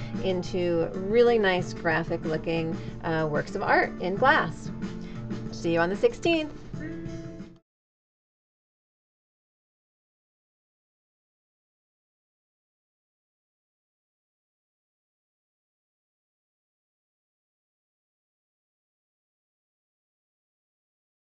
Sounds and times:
Music: 0:00.0 - 0:07.7
Speech: 0:00.2 - 0:04.7, 0:05.6 - 0:06.6.

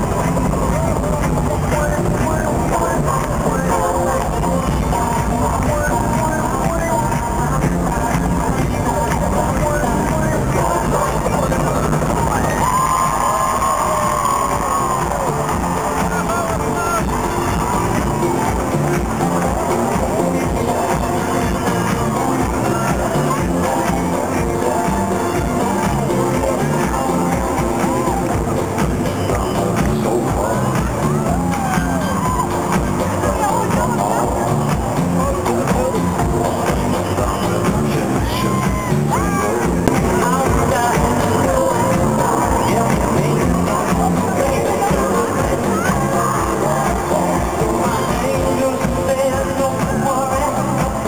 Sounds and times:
Music: 0:00.0 - 0:51.0.

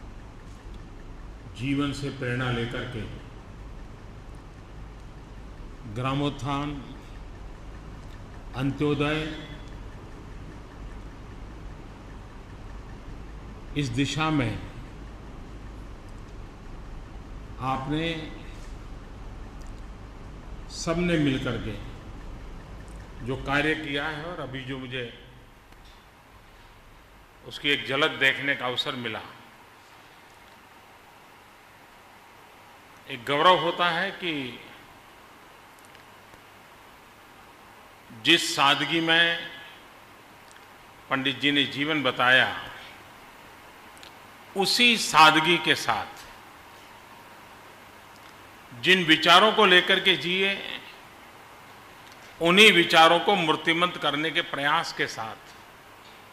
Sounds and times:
Narration, monologue: 0:00.0 - 0:56.3
Male speech, man speaking: 0:01.6 - 0:03.3, 0:05.9 - 0:07.0, 0:08.6 - 0:09.6, 0:13.8 - 0:14.8, 0:17.6 - 0:18.6, 0:20.7 - 0:21.9, 0:23.2 - 0:25.3, 0:27.5 - 0:29.4, 0:33.1 - 0:34.8, 0:38.2 - 0:39.7, 0:41.1 - 0:43.0, 0:44.6 - 0:46.3, 0:48.8 - 0:51.0, 0:52.4 - 0:55.5.

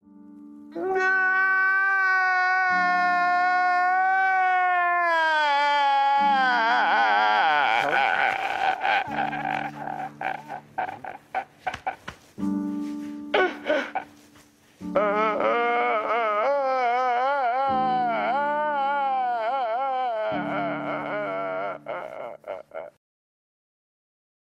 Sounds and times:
Music: 0:00.0 - 0:23.0.

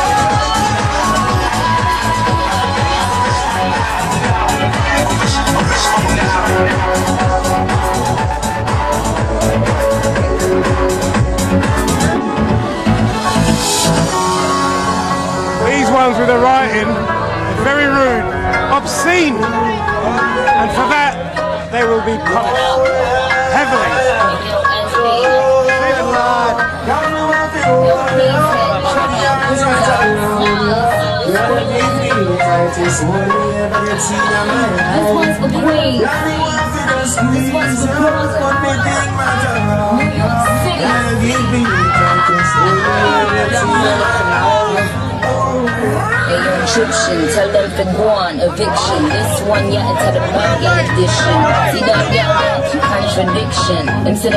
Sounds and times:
Music: 0:00.0 - 0:54.3.

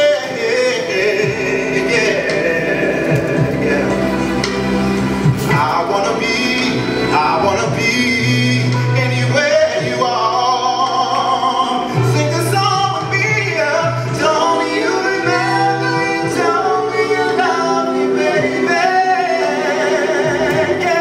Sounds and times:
Music: 0:00.0 - 0:21.0
Singing: 0:05.4 - 0:21.0.

